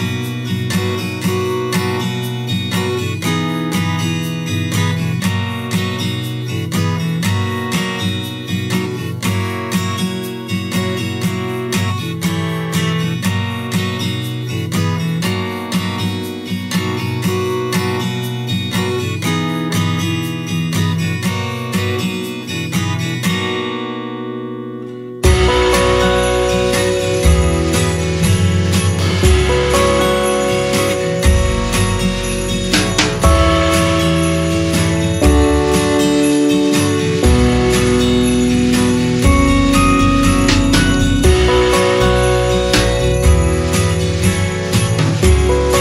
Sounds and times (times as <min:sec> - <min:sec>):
Music: 0:00.0 - 0:45.8.